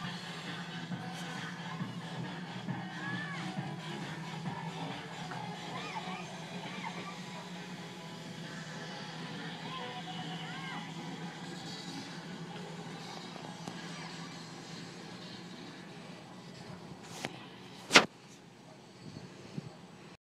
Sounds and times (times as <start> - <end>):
Vehicle: 0.0 - 20.2.